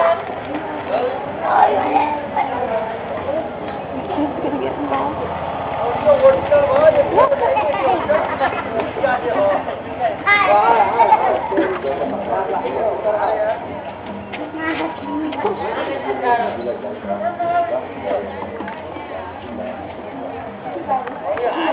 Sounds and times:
Music: 10.2 - 21.7.

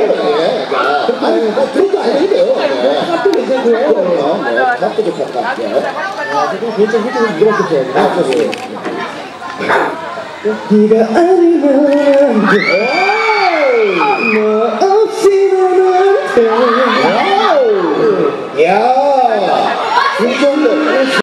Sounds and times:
Male singing: 10.7 - 12.6.

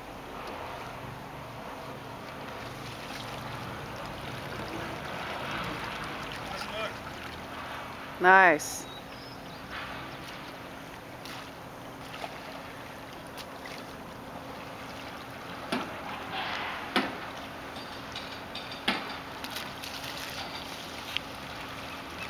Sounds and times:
Rowboat, canoe, kayak: 0.0 - 22.2.

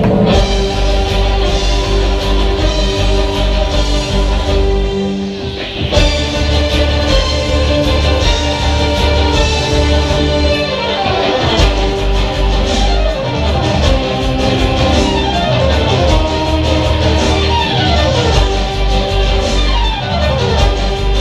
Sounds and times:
Violin, fiddle: 0.3 - 21.2.

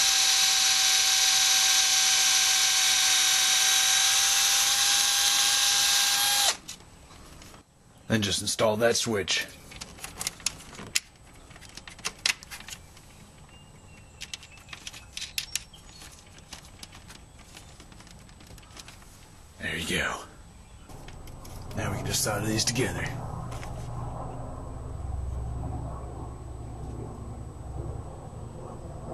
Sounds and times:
Drill: 0.0 - 6.6
Speech: 8.1 - 9.6, 19.6 - 20.4, 21.8 - 23.2.

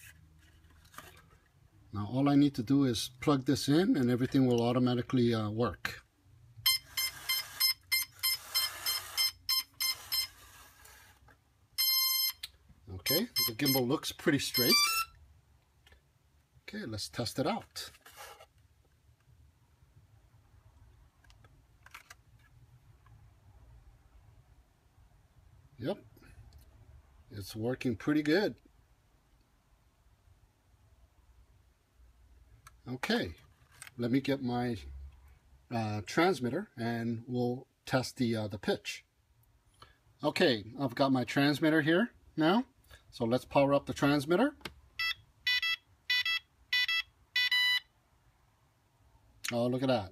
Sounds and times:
Speech: 1.9 - 6.1, 12.9 - 14.9, 16.7 - 18.0, 25.8 - 26.1, 27.3 - 28.6, 32.8 - 33.4, 34.0 - 34.9, 35.7 - 39.1, 40.2 - 44.6, 49.5 - 50.1.

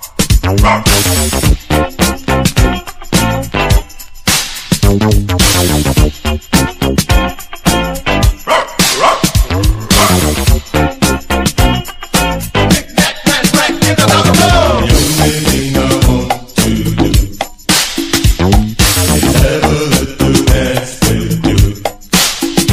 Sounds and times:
Music: 0.0 - 22.7
Bow-wow: 0.6 - 1.3, 8.4 - 10.4.

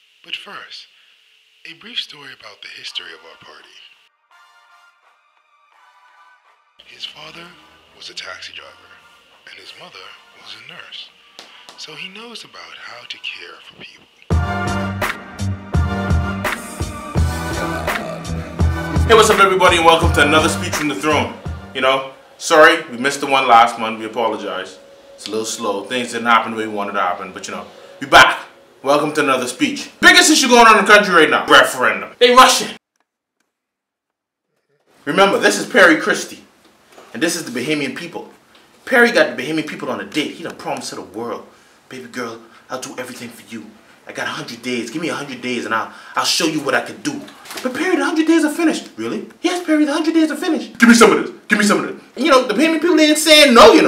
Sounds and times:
Male speech, man speaking: 0.3 - 0.9, 1.7 - 4.0, 6.8 - 11.1, 11.8 - 14.1, 19.0 - 32.8, 35.1 - 36.5, 37.1 - 53.8
Music: 2.9 - 31.2
Narration, monologue: 6.8 - 33.5, 34.9 - 53.8.

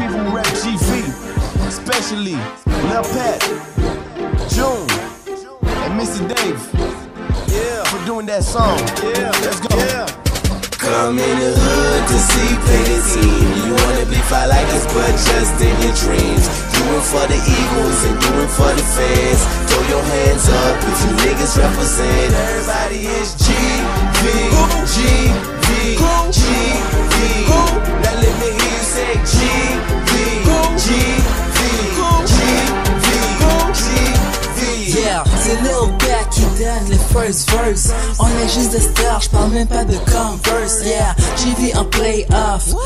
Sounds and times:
Soundtrack music: 0.0 - 42.7
Independent music: 0.0 - 42.8.

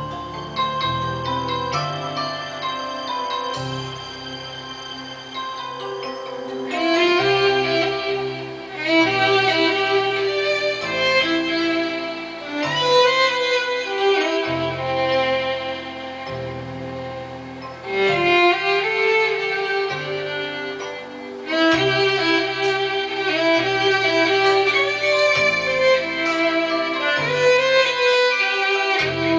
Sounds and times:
Violin, fiddle: 0.0 - 29.3.

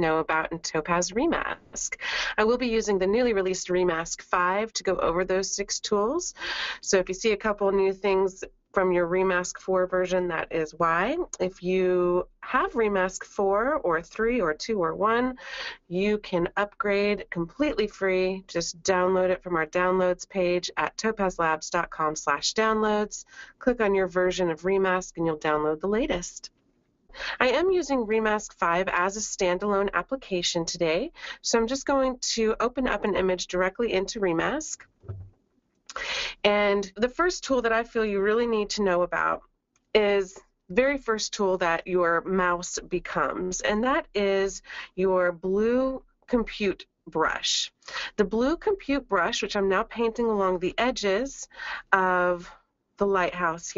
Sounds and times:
Speech: 0.0 - 26.5, 27.2 - 35.2, 35.9 - 39.4, 40.0 - 53.7.

